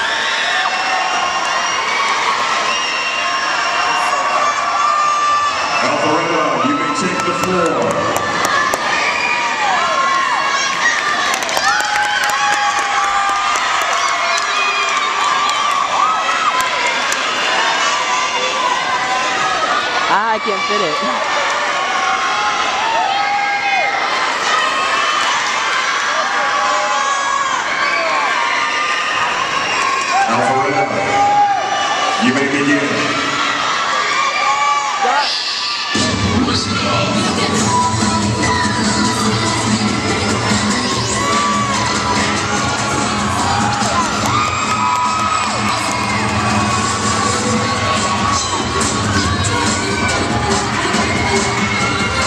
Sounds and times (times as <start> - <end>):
Cheering: 0.0 - 52.2
Music: 36.0 - 52.2.